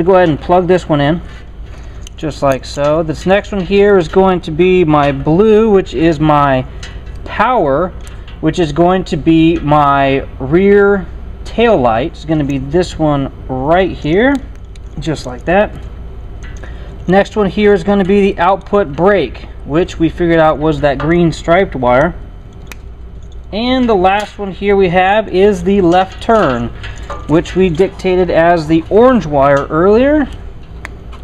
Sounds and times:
Speech: 0.0s - 1.2s, 2.2s - 6.7s, 7.3s - 15.8s, 17.1s - 22.2s, 23.6s - 30.4s.

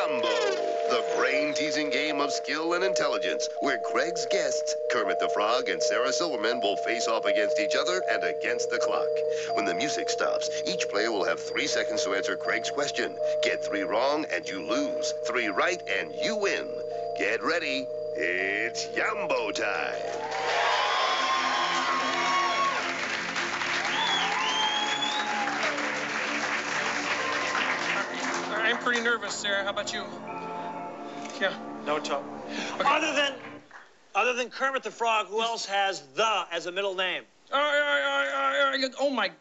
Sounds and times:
Speech: 0.0s - 20.0s, 34.2s - 39.4s
Music: 0.0s - 33.8s.

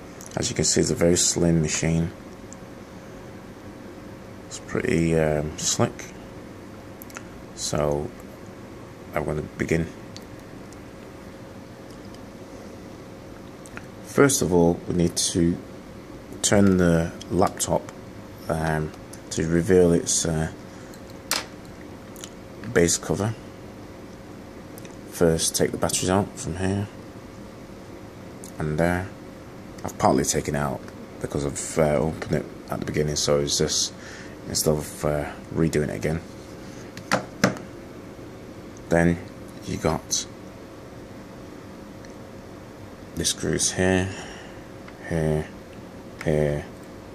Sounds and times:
Speech: 0.3s - 2.2s, 4.5s - 6.2s, 7.6s - 8.2s, 9.1s - 10.0s, 14.1s - 15.6s, 16.4s - 20.6s, 22.6s - 23.5s, 25.1s - 27.0s, 28.4s - 29.2s, 29.8s - 36.3s, 38.9s - 40.4s, 43.2s - 44.3s, 45.0s - 45.6s, 46.2s - 46.8s.

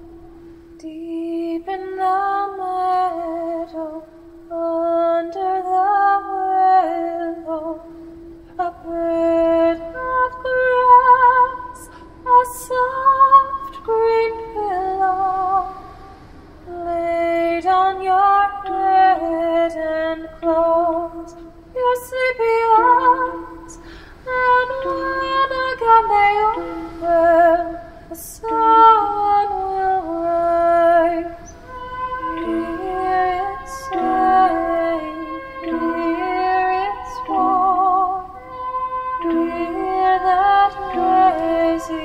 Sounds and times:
Lullaby: 0.0s - 42.0s.

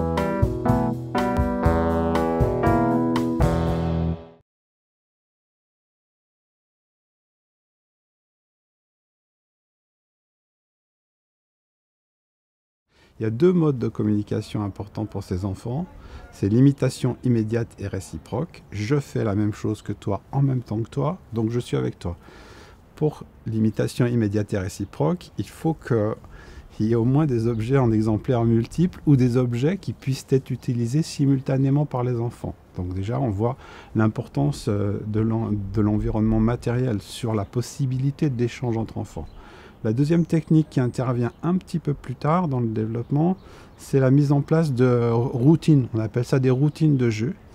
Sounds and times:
Speech: 13.2s - 22.2s, 23.0s - 47.4s.

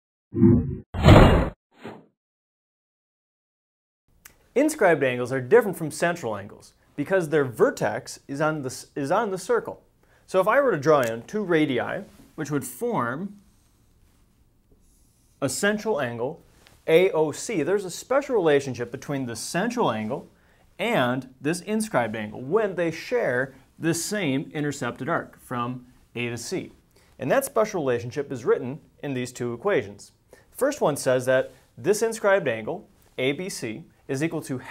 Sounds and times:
Inside, small room: 4.1s - 34.7s
Speech: 4.6s - 13.4s, 15.4s - 34.7s.

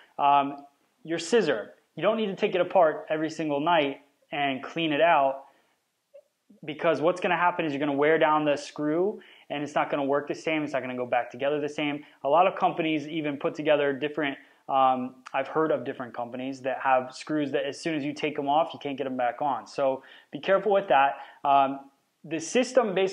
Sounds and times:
Speech: 0.2s - 5.5s, 6.6s - 23.1s.

